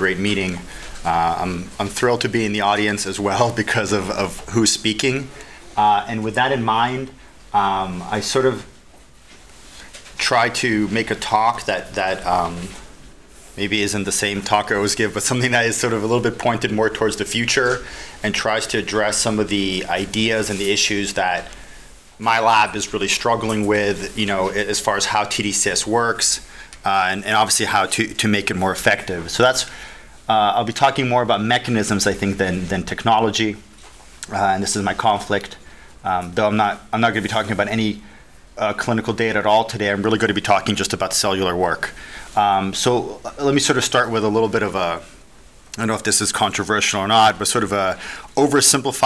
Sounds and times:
Speech: 0.0s - 8.8s, 10.1s - 12.9s, 13.6s - 21.6s, 22.2s - 49.0s.

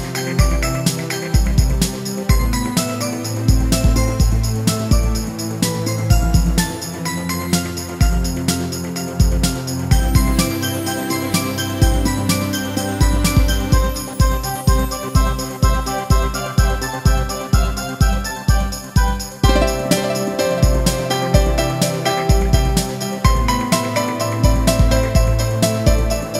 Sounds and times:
Music: 0.0s - 26.3s.

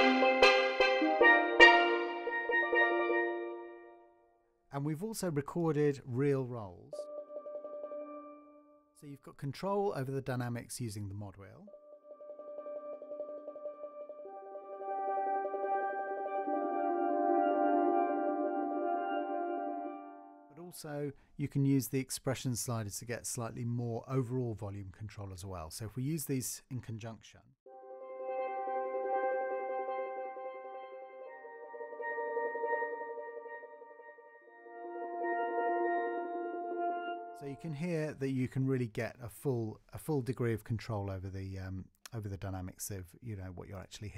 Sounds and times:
Musical instrument: 0.0s - 4.3s, 7.0s - 8.8s, 11.7s - 20.6s, 27.7s - 38.1s
Speech: 4.7s - 7.1s, 9.0s - 11.7s, 20.6s - 27.5s, 37.4s - 44.1s.

